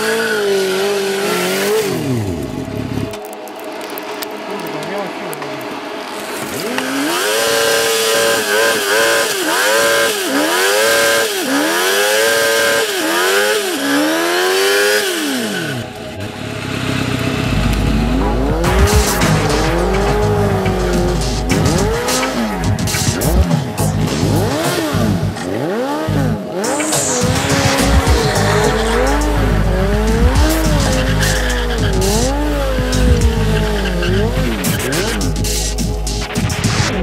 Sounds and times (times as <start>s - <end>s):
Tire squeal: 0.0s - 2.2s, 6.5s - 35.8s
Motorcycle: 0.0s - 3.2s, 6.2s - 36.0s
Music: 0.1s - 9.9s, 14.6s - 37.0s.